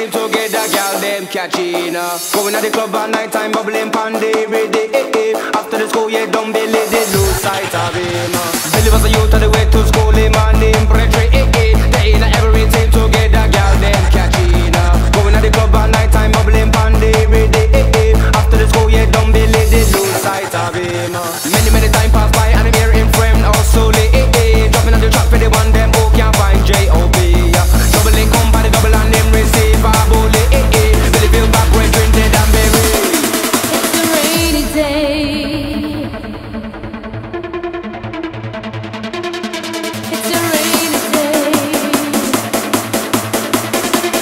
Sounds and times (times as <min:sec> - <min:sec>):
Music: 0:00.0 - 0:44.2.